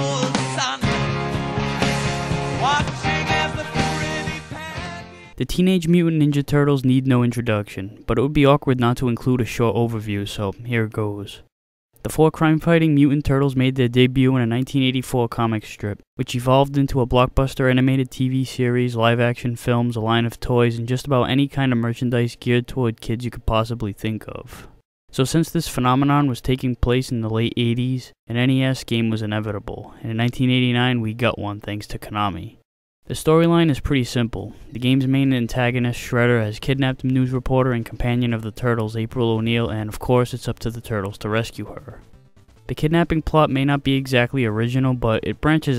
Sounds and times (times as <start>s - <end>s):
Speech synthesizer: 12.1s - 24.6s, 25.2s - 42.0s, 42.7s - 45.7s.